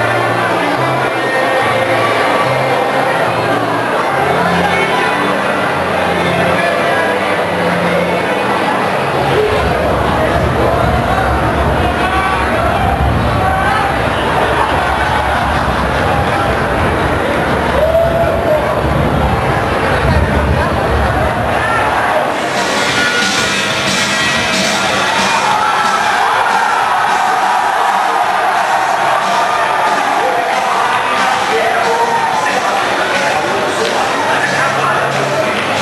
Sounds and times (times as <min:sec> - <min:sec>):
Speech: 0:00.0 - 0:35.8.